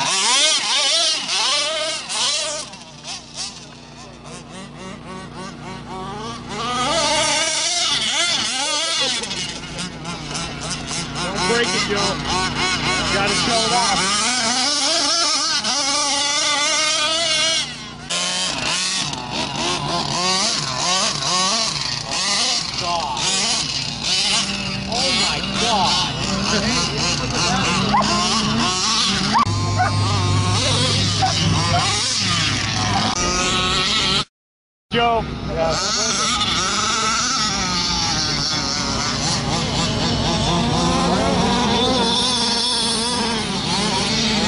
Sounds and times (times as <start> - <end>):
Accelerating, revving, vroom: 0.0 - 3.6, 4.2 - 34.3, 35.7 - 44.4
Speech: 11.2 - 12.3, 13.0 - 14.1, 24.9 - 28.2, 34.9 - 38.7.